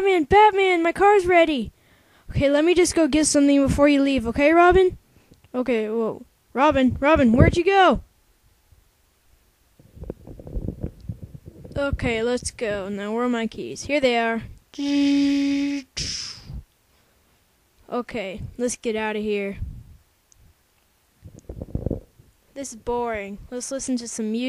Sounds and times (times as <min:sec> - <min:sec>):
Speech: 0:00.0 - 0:01.7, 0:02.3 - 0:08.1, 0:11.8 - 0:16.3, 0:17.9 - 0:19.6, 0:22.6 - 0:24.4.